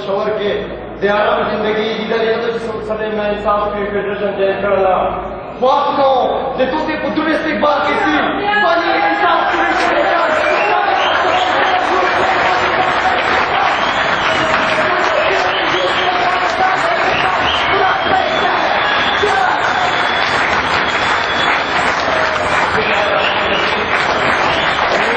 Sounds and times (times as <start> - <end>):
Male speech, man speaking: 0.0 - 13.7, 14.4 - 19.7, 22.7 - 24.0, 24.9 - 25.1.